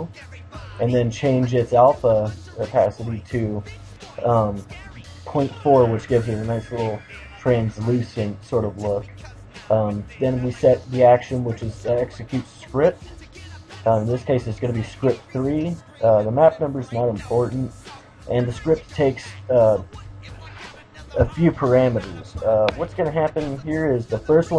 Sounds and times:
Music: 0.0 - 24.5
Speech: 0.8 - 3.6, 4.2 - 9.1, 9.7 - 13.0, 13.9 - 17.7, 18.3 - 19.9, 21.2 - 24.5.

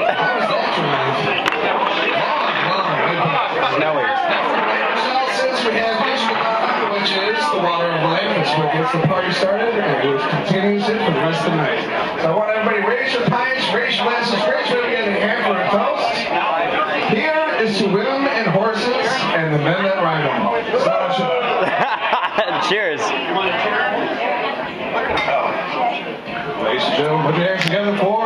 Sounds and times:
Speech: 0.0 - 28.2.

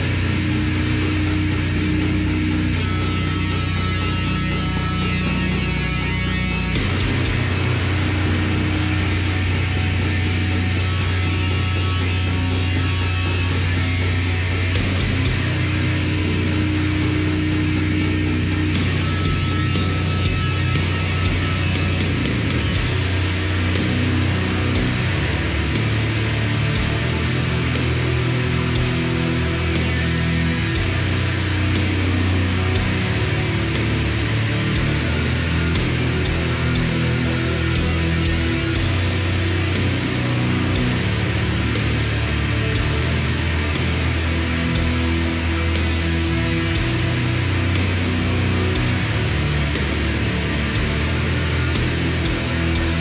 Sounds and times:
Music: 0.0 - 53.0.

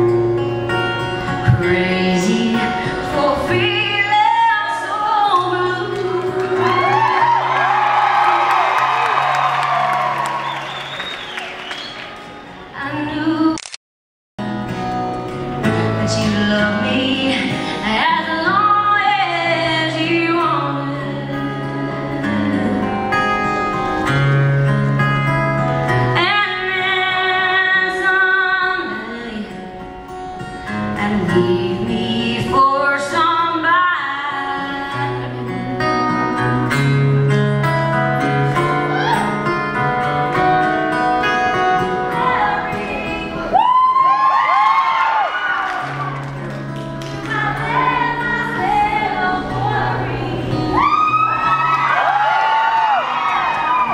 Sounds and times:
Female singing: 1.5 - 7.0, 12.8 - 13.6, 16.1 - 23.0, 26.2 - 29.7, 30.9 - 36.9, 42.1 - 43.6, 47.2 - 50.9
Country: 14.4 - 53.9.

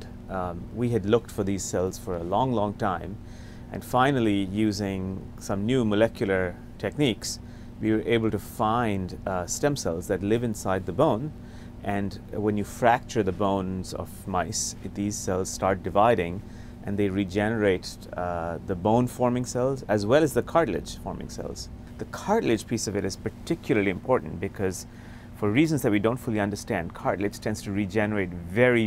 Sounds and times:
Speech: 0.0 - 28.8.

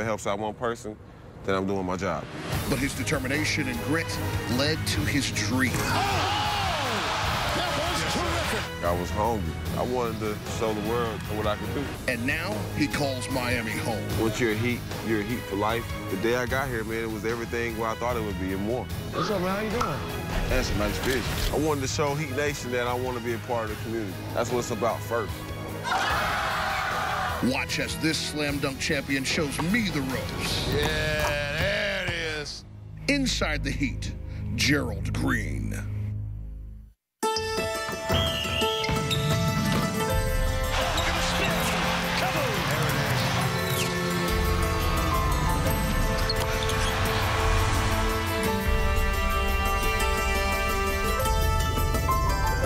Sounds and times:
Music: 2.2 - 52.6.

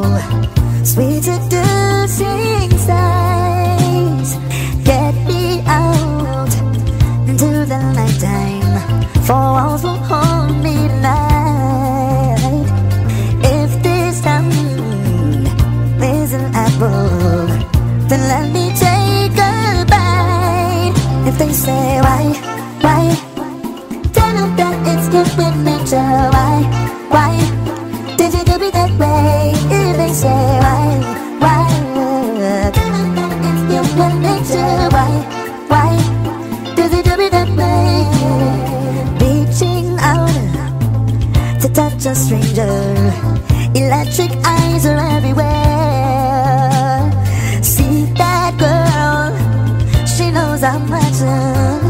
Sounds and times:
Happy music: 0.0 - 51.9.

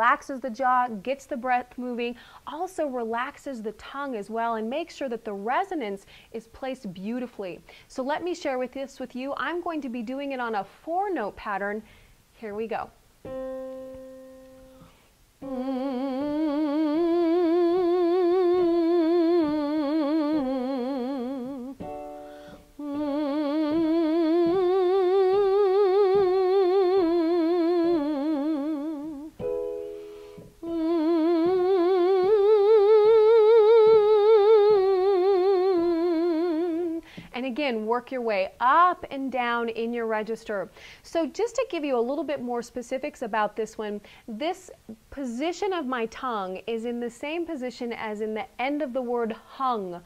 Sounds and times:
Speech: 0.0 - 13.0, 37.3 - 50.0.

